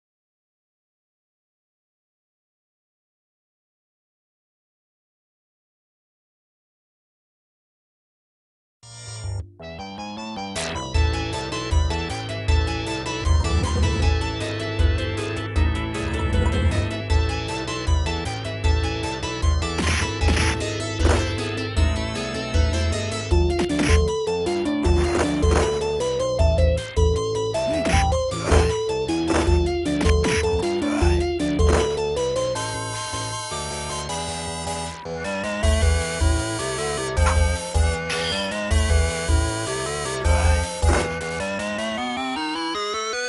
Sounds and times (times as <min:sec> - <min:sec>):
Video game music: 0:08.8 - 0:43.2.